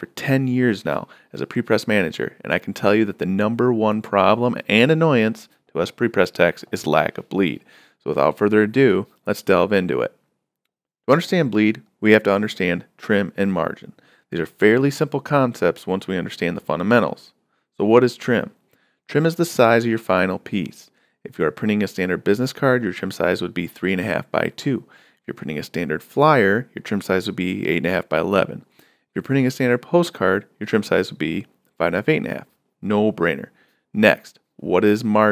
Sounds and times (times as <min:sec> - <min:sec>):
Speech: 0:00.0 - 0:10.2, 0:11.1 - 0:35.3.